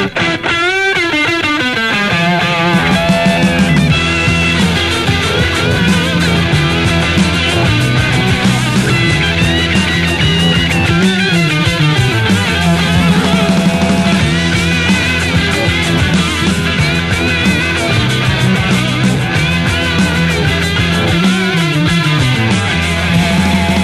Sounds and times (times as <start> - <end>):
Music: 0.0 - 23.8.